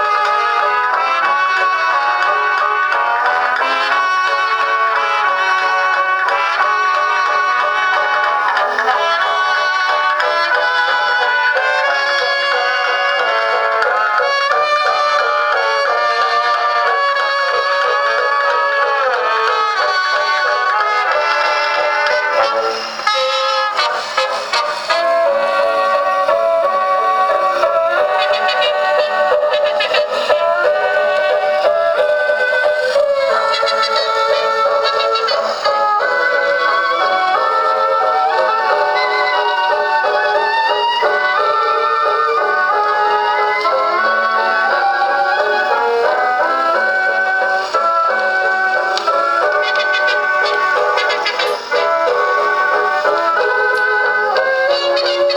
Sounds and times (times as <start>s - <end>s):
Music: 0.0s - 55.3s.